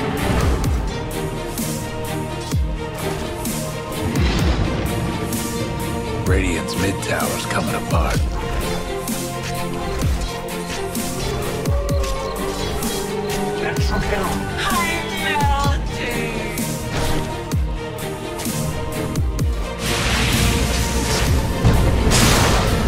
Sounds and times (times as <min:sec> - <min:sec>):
Music: 0:00.0 - 0:22.8
Speech: 0:06.3 - 0:08.2.